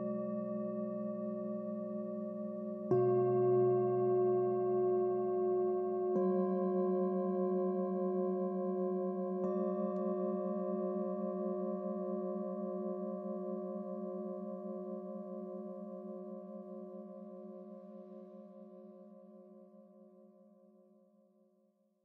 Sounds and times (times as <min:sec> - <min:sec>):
Gong: 0:00.0 - 0:14.6.